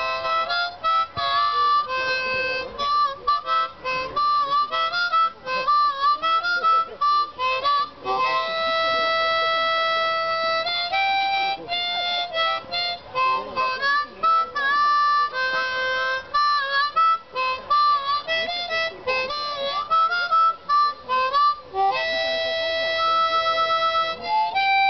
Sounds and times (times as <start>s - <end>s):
Music: 0.0s - 24.8s
Speech: 0.0s - 24.8s.